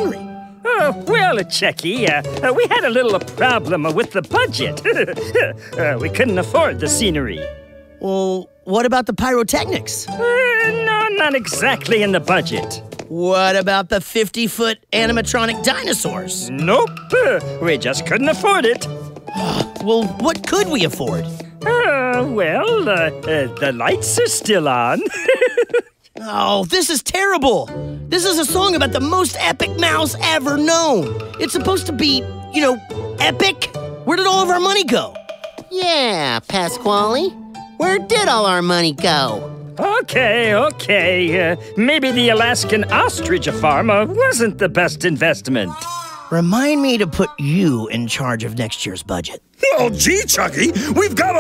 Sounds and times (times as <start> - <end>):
Music: 0.0 - 13.8, 14.4 - 51.4
Speech: 0.0 - 25.1, 26.2 - 51.4.